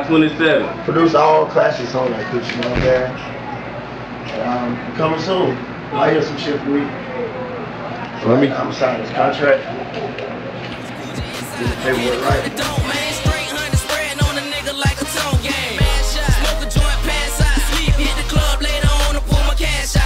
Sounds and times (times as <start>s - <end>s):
Speech: 0.0s - 10.4s, 11.5s - 12.6s
Music: 10.7s - 20.0s.